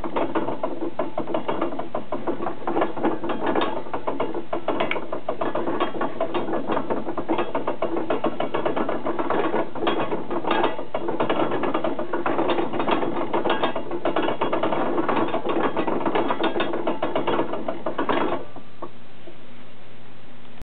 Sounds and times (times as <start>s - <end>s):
Ratchet, pawl: 0.0s - 18.6s.